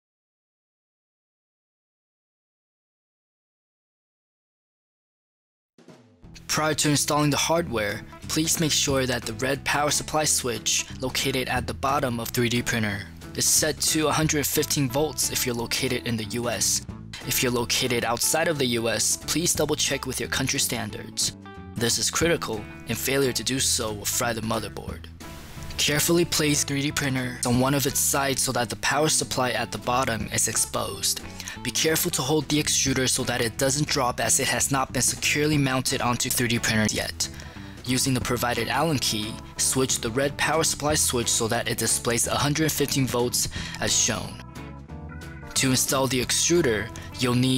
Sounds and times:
Music: 5.8 - 47.5
Speech: 6.4 - 25.1, 25.8 - 44.4, 45.6 - 47.5.

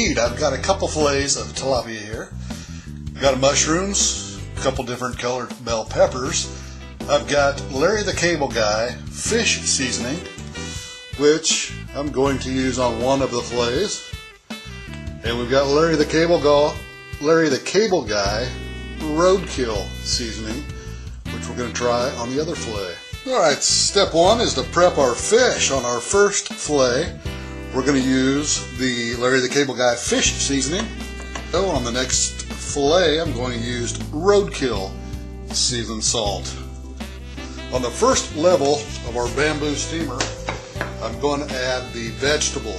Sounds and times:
Speech: 0.0 - 2.3, 3.2 - 10.3, 11.2 - 14.1, 15.2 - 20.7, 21.3 - 36.6, 37.7 - 40.4, 41.0 - 42.7
Music: 0.0 - 42.7.

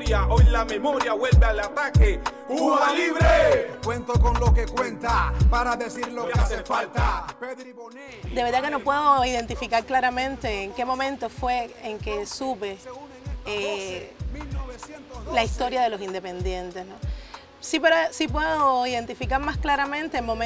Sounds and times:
Music: 0.0 - 20.4
Speech: 8.1 - 12.9, 13.5 - 14.2, 15.1 - 17.0, 17.6 - 20.4.

